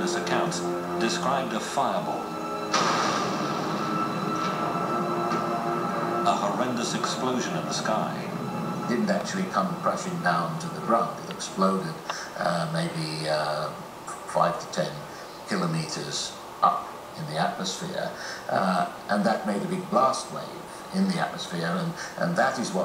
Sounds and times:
Speech: 0:00.0 - 0:02.2, 0:06.3 - 0:08.3, 0:08.9 - 0:22.8.

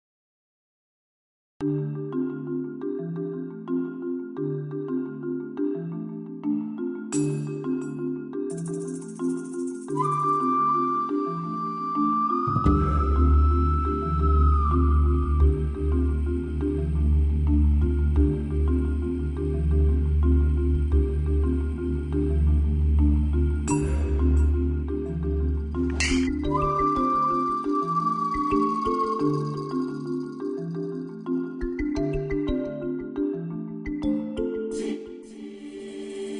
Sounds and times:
Music: 0:01.6 - 0:36.4.

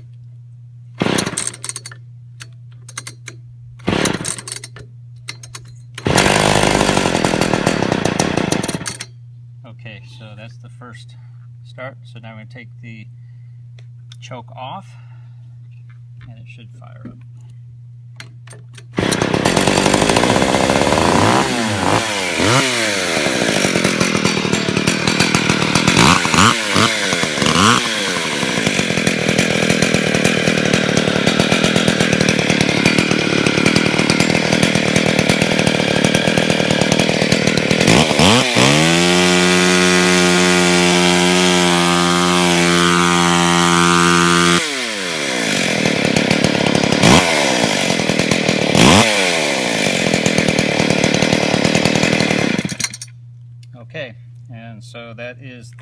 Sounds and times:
Chainsaw: 0:01.0 - 0:01.9, 0:03.8 - 0:04.7, 0:06.0 - 0:09.1, 0:18.9 - 0:53.1
Tools: 0:01.2 - 0:03.4, 0:04.0 - 0:06.1, 0:08.8 - 0:09.2, 0:52.6 - 0:53.2
Speech: 0:09.6 - 0:13.1, 0:14.2 - 0:15.0, 0:16.2 - 0:17.2, 0:53.7 - 0:55.8.

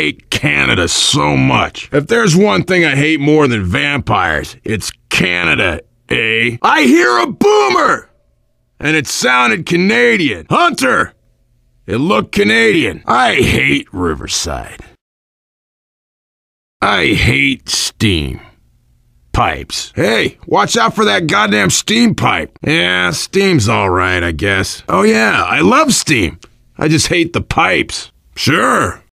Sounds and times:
Speech: 0:00.0 - 0:08.1, 0:08.8 - 0:11.2, 0:11.9 - 0:15.0, 0:16.8 - 0:18.6, 0:19.3 - 0:29.1.

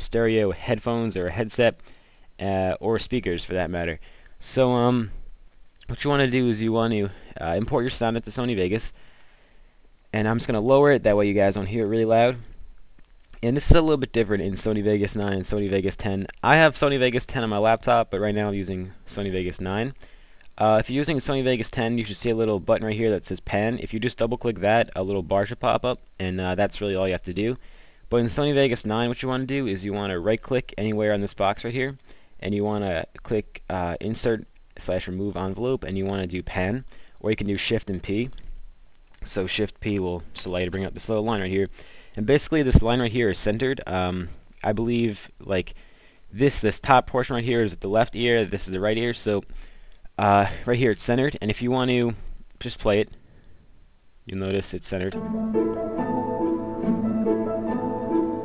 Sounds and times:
Speech: 0:00.0 - 0:01.8, 0:02.4 - 0:05.2, 0:05.8 - 0:09.0, 0:10.1 - 0:12.5, 0:13.4 - 0:20.0, 0:20.6 - 0:38.4, 0:39.2 - 0:49.5, 0:50.2 - 0:53.2, 0:54.3 - 0:55.2.

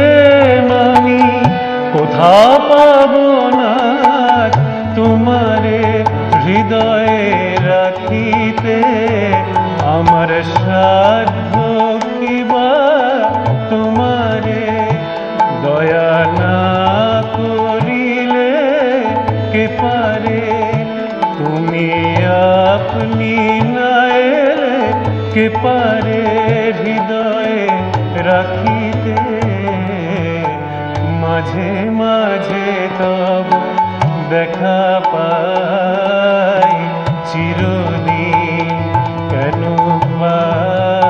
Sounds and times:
Carnatic music: 0:00.0 - 0:41.0.

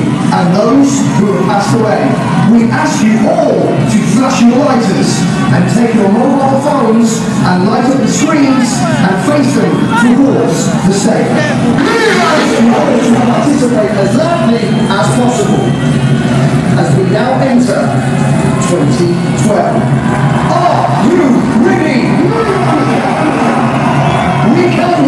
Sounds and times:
Speech: 0:00.0 - 0:15.8, 0:16.8 - 0:18.0, 0:18.6 - 0:19.9, 0:20.5 - 0:23.6, 0:24.4 - 0:25.0.

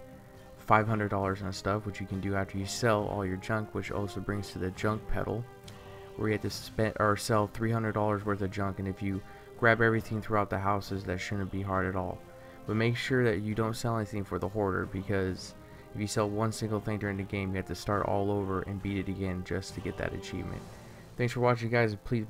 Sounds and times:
Music: 0:00.0 - 0:22.2
Speech: 0:00.6 - 0:05.5, 0:06.2 - 0:20.6, 0:21.2 - 0:22.2.

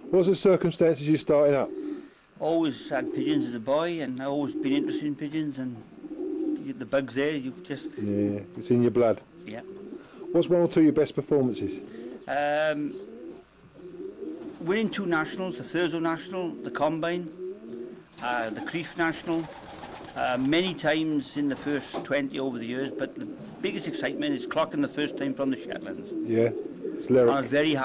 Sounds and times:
Coo: 0:01.6 - 0:02.1, 0:02.8 - 0:03.6, 0:04.3 - 0:05.2, 0:06.0 - 0:06.7, 0:07.5 - 0:08.6, 0:09.4 - 0:10.5, 0:11.7 - 0:20.2, 0:22.7 - 0:27.8
Bird vocalization, bird call, bird song: 0:12.0 - 0:12.4.

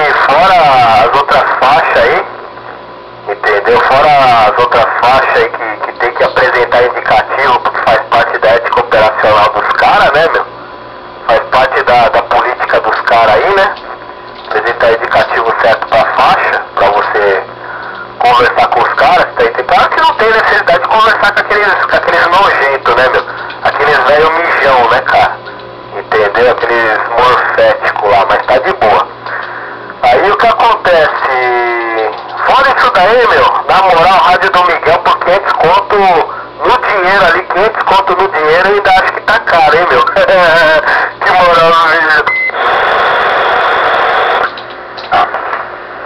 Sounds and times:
Speech: 0:00.0 - 0:02.3, 0:03.3 - 0:10.5, 0:11.3 - 0:13.8, 0:14.5 - 0:17.5, 0:18.2 - 0:29.1, 0:30.0 - 0:42.3
Radio: 0:00.0 - 0:10.5, 0:11.2 - 0:45.7.

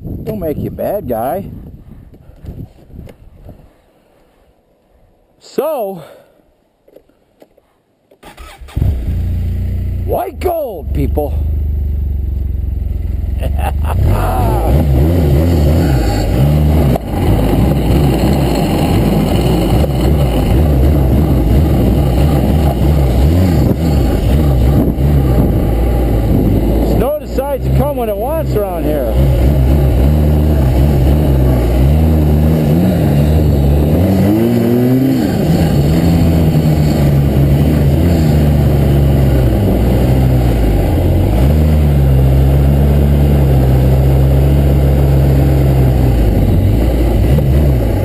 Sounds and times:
Speech: 0:00.2 - 0:01.5, 0:05.4 - 0:06.2, 0:10.1 - 0:11.4, 0:14.1 - 0:14.8, 0:26.9 - 0:29.2.

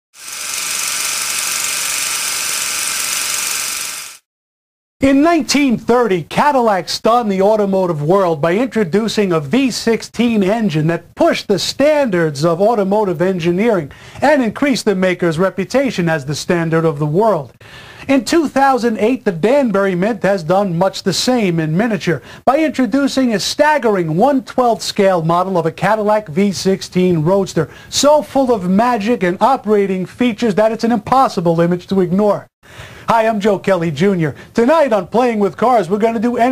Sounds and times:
Rattle: 0:00.2 - 0:04.2
Speech: 0:05.0 - 0:17.5, 0:18.1 - 0:32.5, 0:33.1 - 0:36.5.

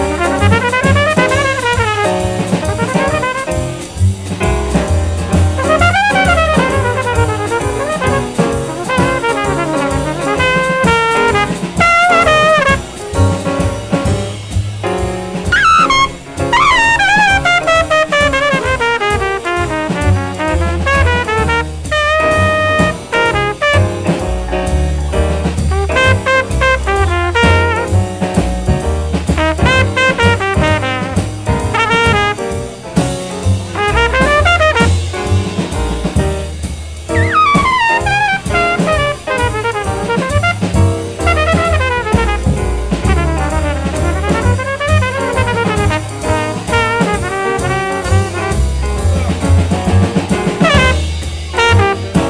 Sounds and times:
Saxophone: 0:00.0 - 0:04.0, 0:05.5 - 0:12.8, 0:15.5 - 0:23.9, 0:37.2 - 0:48.5.

